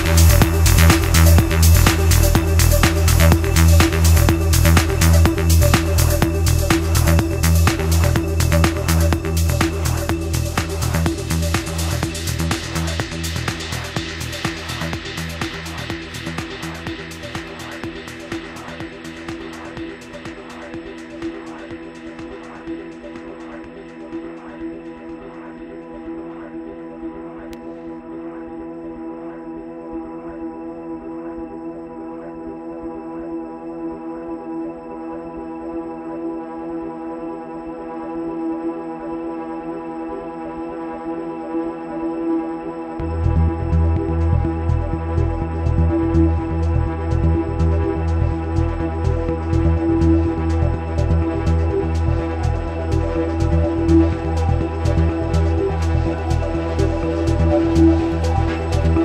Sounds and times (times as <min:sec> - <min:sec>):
Electronic dance music: 0:00.0 - 0:59.0.